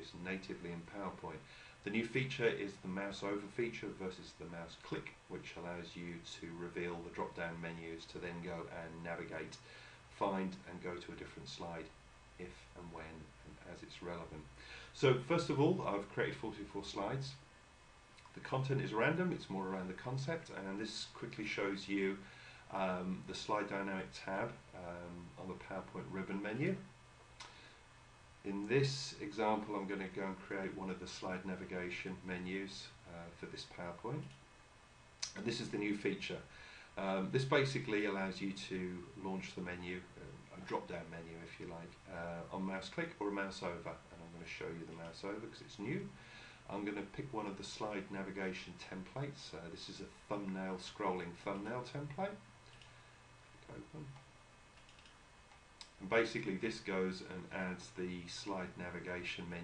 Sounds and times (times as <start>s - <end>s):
Speech: 0.0s - 17.5s, 18.2s - 26.9s, 28.4s - 34.4s, 35.2s - 52.5s, 53.6s - 54.2s, 55.8s - 59.6s.